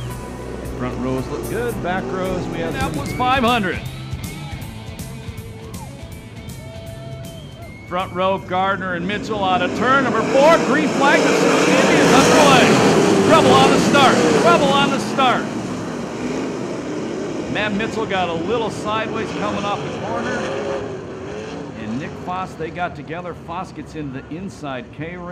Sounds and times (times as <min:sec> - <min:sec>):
Car passing by: 0:00.0 - 0:04.5, 0:08.0 - 0:21.9.